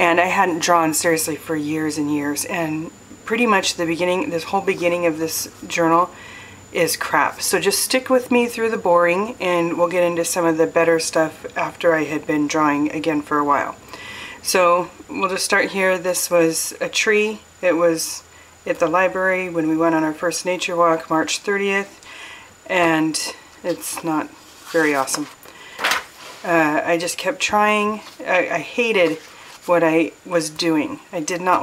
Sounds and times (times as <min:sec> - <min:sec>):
Speech: 0:00.0 - 0:06.1, 0:06.8 - 0:13.8, 0:14.4 - 0:22.0, 0:22.7 - 0:25.4, 0:26.4 - 0:31.6.